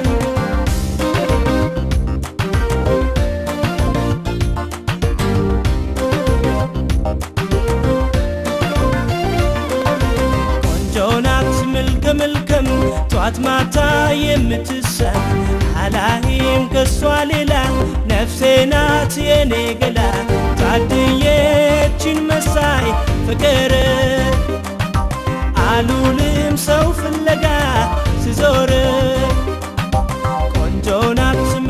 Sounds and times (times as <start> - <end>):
Funk: 0.0 - 31.7.